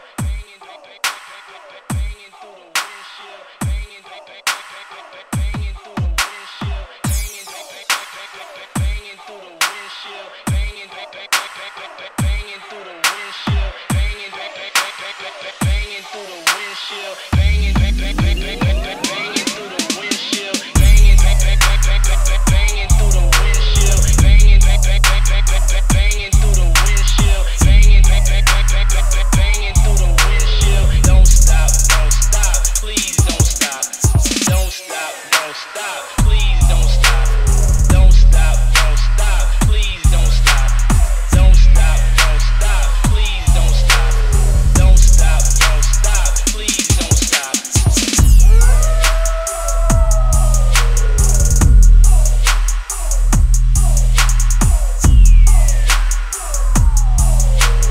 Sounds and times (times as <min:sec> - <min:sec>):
Music: 0:00.0 - 0:57.9.